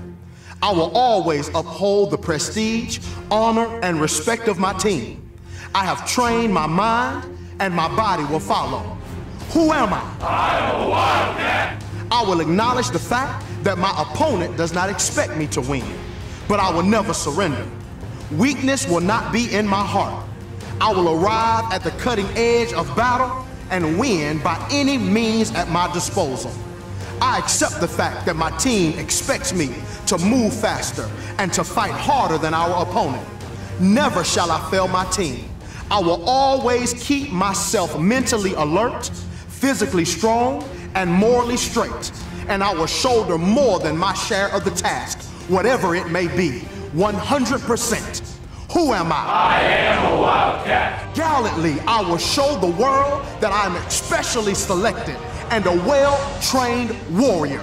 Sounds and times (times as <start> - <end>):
Music: 0.0 - 57.6
Speech: 0.6 - 20.2, 20.8 - 26.6, 27.2 - 57.6.